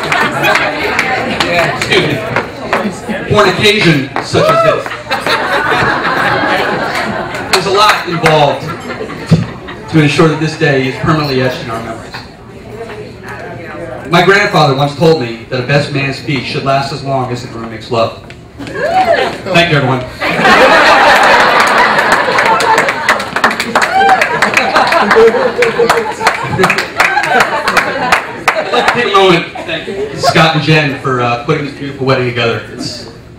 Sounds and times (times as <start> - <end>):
Male speech, man speaking: 1.4 - 2.3, 3.0 - 4.9, 7.5 - 8.7, 9.9 - 12.3, 14.1 - 18.2, 19.5 - 20.1, 28.8 - 33.2.